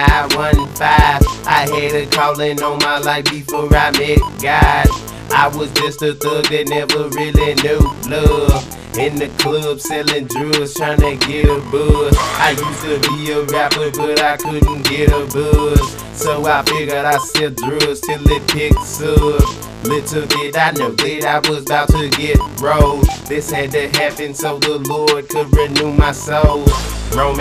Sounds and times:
Music: 0:00.0 - 0:27.4.

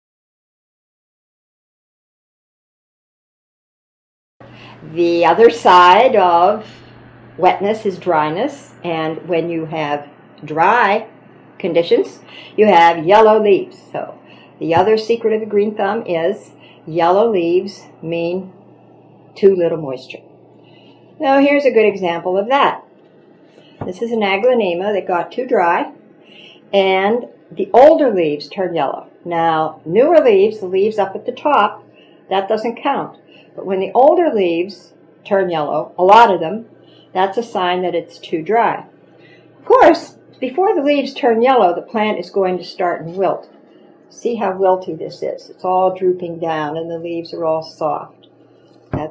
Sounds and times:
Speech: 0:04.8 - 0:18.6, 0:19.4 - 0:20.3, 0:21.2 - 0:22.8, 0:23.8 - 0:26.0, 0:26.7 - 0:38.9, 0:39.6 - 0:43.5, 0:44.1 - 0:48.2.

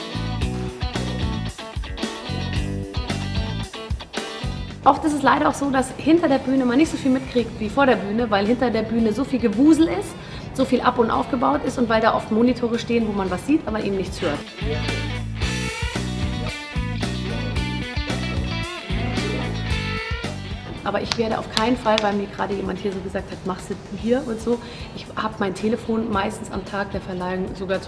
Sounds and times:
Music: 0:00.0 - 0:27.8
Speech: 0:04.8 - 0:15.1, 0:20.9 - 0:27.8.

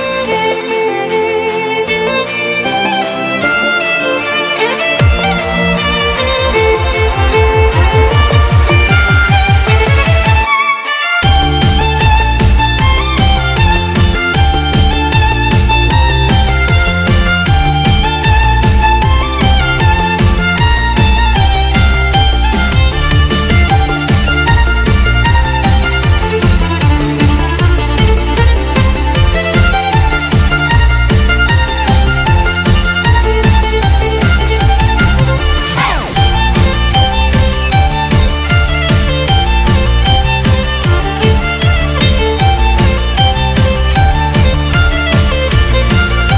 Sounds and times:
Exciting music: 0:00.0 - 0:46.3.

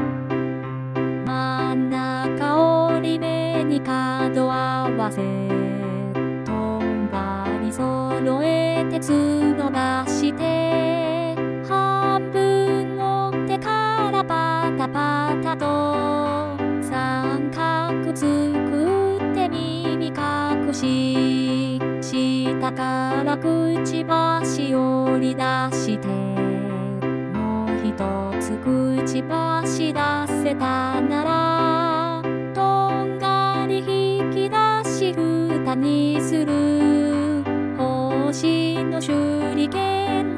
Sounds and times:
Music: 0:00.0 - 0:40.3
Female singing: 0:01.2 - 0:40.3.

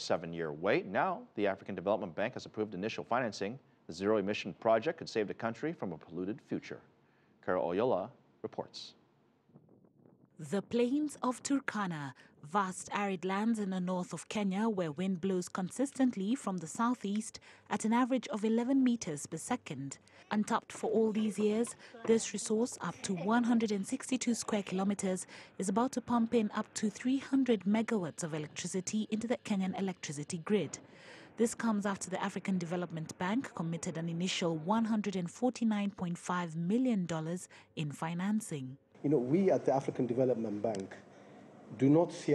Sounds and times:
Speech: 0:00.0 - 0:09.0, 0:10.4 - 0:30.8, 0:31.4 - 0:41.0, 0:41.8 - 0:42.3.

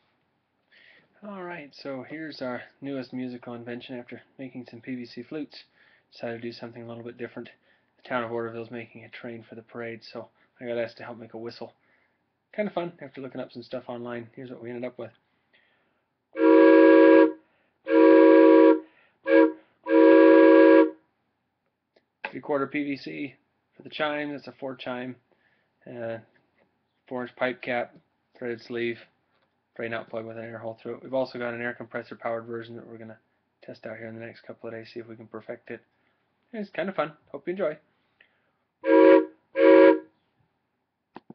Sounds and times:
Speech: 0:01.2 - 0:11.8, 0:12.5 - 0:15.2, 0:22.2 - 0:26.4, 0:27.1 - 0:29.2, 0:29.8 - 0:35.9, 0:36.5 - 0:37.9.

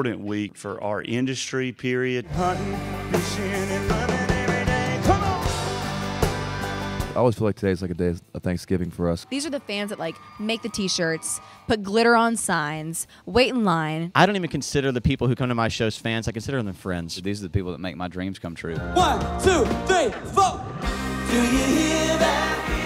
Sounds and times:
Speech: 0:00.0 - 0:02.3, 0:07.2 - 0:09.5, 0:11.8 - 0:20.6
Music: 0:02.2 - 0:07.7, 0:18.8 - 0:22.8.

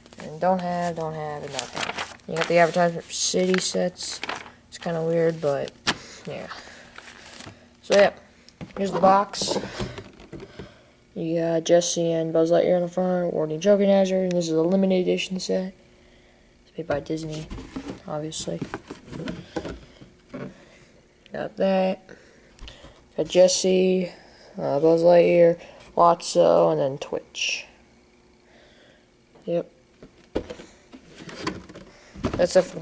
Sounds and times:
Speech: 0:00.2 - 0:01.7, 0:02.3 - 0:04.2, 0:04.8 - 0:05.7, 0:07.8 - 0:08.2, 0:08.8 - 0:09.6, 0:11.2 - 0:15.8, 0:16.7 - 0:18.7, 0:21.3 - 0:22.0, 0:23.2 - 0:27.8, 0:29.4 - 0:29.7, 0:32.4 - 0:32.8.

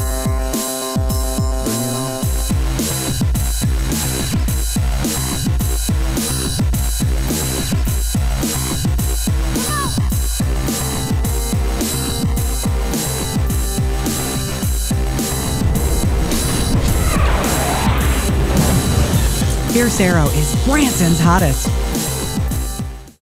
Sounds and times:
Music: 0:00.0 - 0:23.2
Speech: 0:19.6 - 0:21.7.

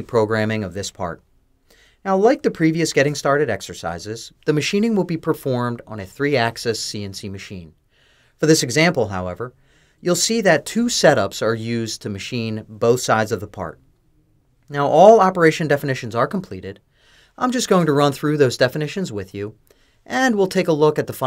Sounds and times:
Speech: 0:00.0 - 0:01.3, 0:02.0 - 0:07.8, 0:08.4 - 0:13.9, 0:14.7 - 0:16.8, 0:17.4 - 0:21.2.

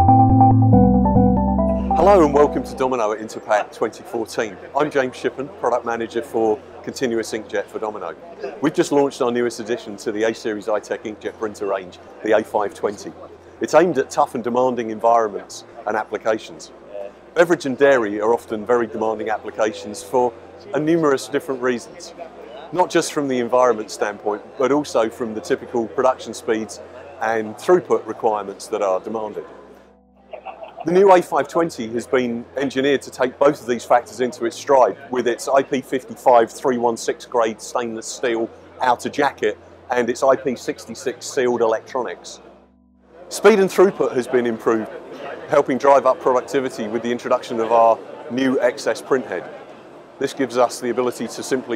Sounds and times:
Speech: 0:01.9 - 0:29.6, 0:30.4 - 0:42.4, 0:43.3 - 0:49.6, 0:50.2 - 0:51.7.

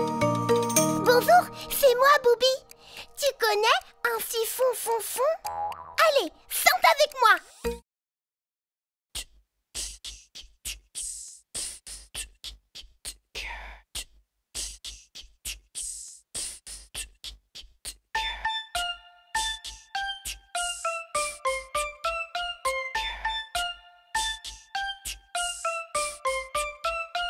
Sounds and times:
Speech: 0:01.1 - 0:02.6, 0:03.2 - 0:05.4, 0:06.0 - 0:07.5.

